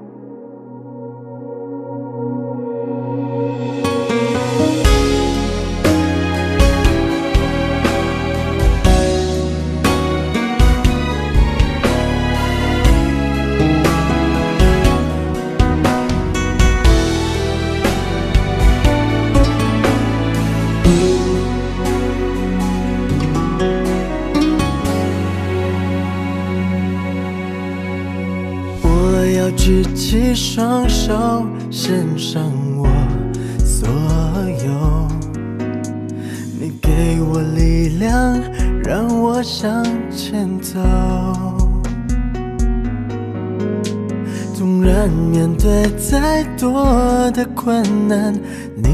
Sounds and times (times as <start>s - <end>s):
Music: 0.0s - 48.9s.